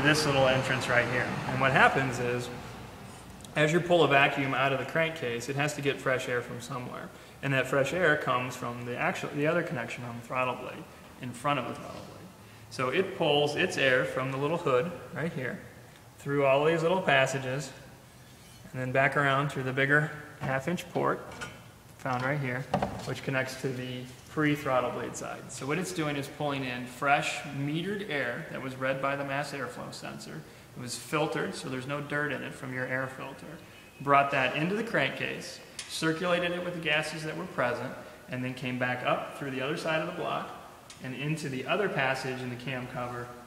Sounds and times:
Speech: 0.0s - 2.6s, 3.5s - 15.6s, 16.2s - 17.8s, 18.7s - 21.3s, 22.0s - 43.4s.

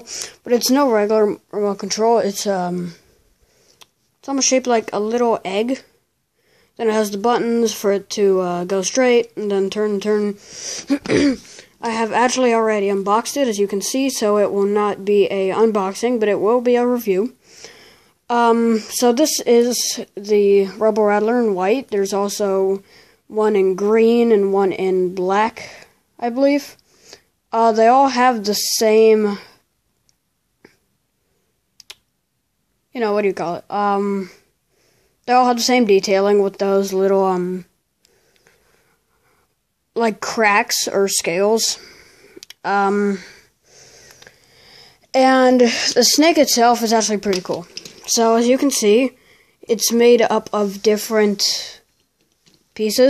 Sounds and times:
Speech: 0.0s - 3.0s, 4.2s - 6.0s, 6.8s - 17.4s, 18.3s - 26.8s, 27.5s - 29.6s, 32.9s - 34.4s, 35.3s - 37.7s, 40.0s - 41.9s, 42.6s - 43.4s, 45.1s - 51.9s, 52.8s - 53.1s
Inside, small room: 0.0s - 53.1s.

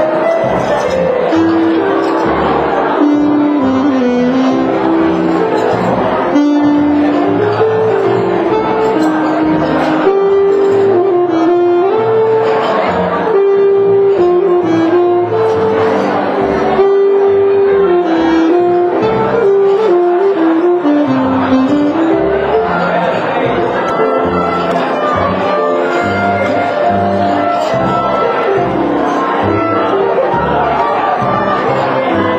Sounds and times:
Music: 0.0s - 32.3s.

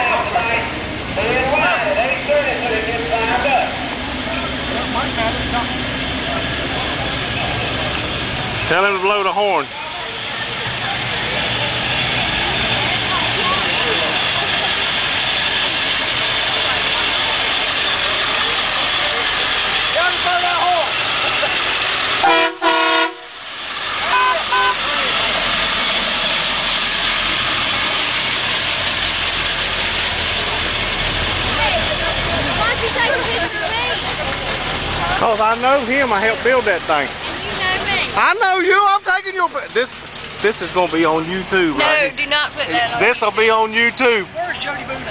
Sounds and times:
Truck: 0.0s - 45.1s.

